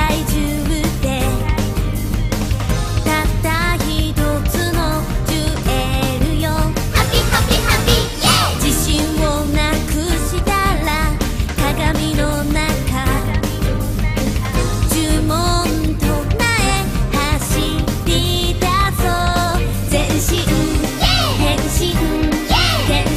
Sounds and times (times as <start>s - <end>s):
Music: 0.0s - 23.1s.